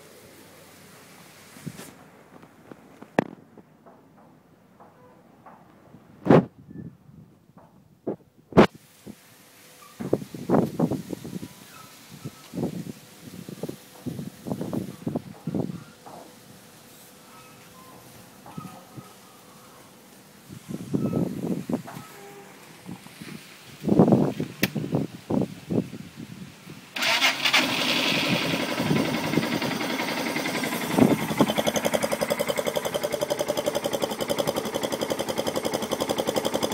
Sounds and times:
Engine starting: 27.0s - 36.7s
Motorcycle: 27.0s - 36.7s.

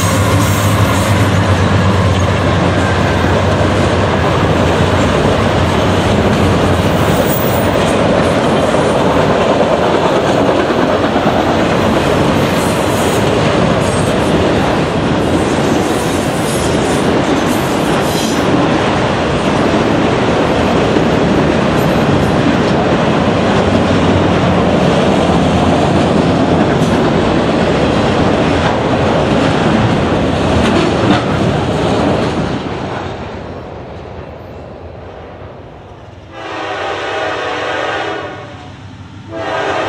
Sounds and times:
Railroad car, train wagon: 0.0s - 39.8s
Train: 0.0s - 39.8s
Clickety-clack: 0.3s - 18.8s, 20.6s - 33.3s.

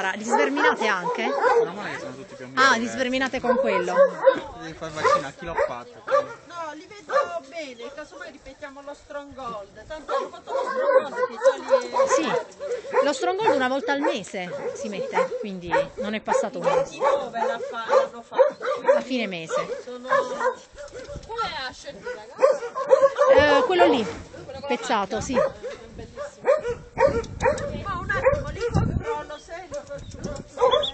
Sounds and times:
Dog: 0.2s - 2.2s, 3.4s - 6.5s, 7.1s - 7.4s, 10.1s - 21.3s, 22.0s - 24.2s, 25.3s - 29.4s, 30.5s - 30.9s.

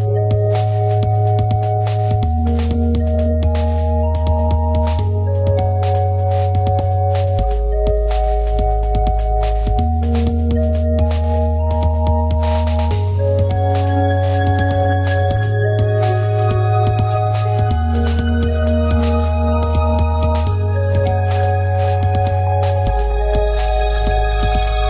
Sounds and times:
Music: 0.0s - 24.8s.

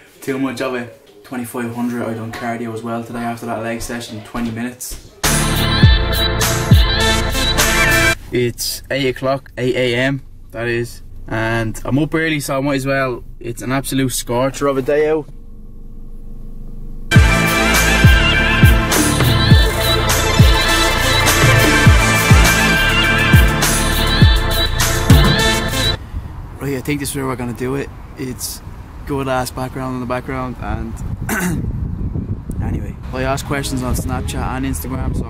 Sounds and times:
Male speech, man speaking: 0.2s - 5.1s, 8.3s - 15.3s, 26.6s - 31.0s, 32.6s - 35.2s
Music: 5.2s - 8.2s, 17.1s - 26.0s.

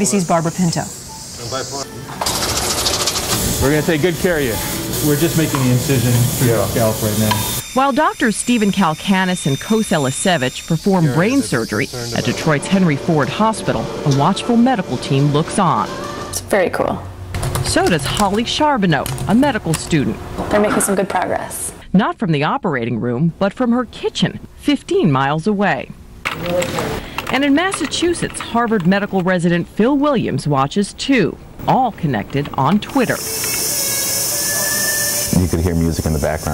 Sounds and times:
Speech: 3.6s - 15.8s, 35.3s - 36.5s.

